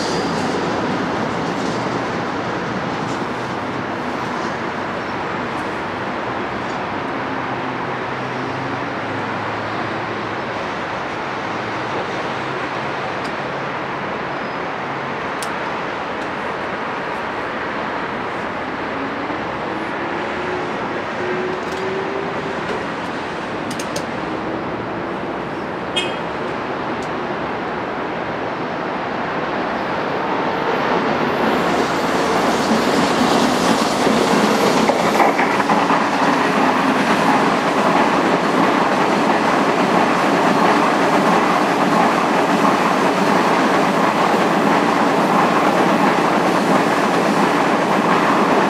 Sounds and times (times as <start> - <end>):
Train: 0.0 - 48.7.